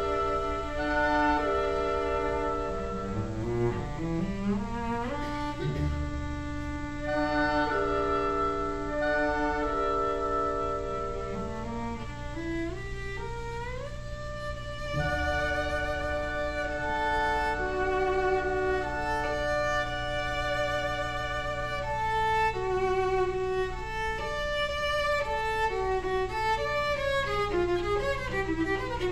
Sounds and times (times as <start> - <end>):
Violin, fiddle: 0.0 - 29.1.